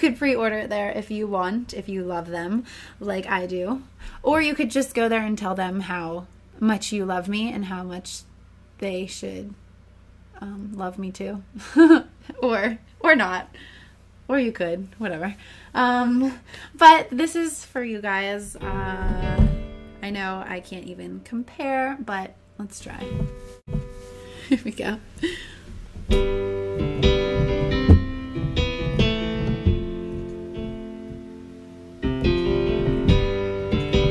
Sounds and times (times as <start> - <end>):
Speech: 0.0 - 9.6, 10.4 - 11.5, 12.4 - 13.5, 14.3 - 23.1, 24.6 - 25.0
Music: 18.6 - 20.5, 23.0 - 24.4, 26.1 - 34.1.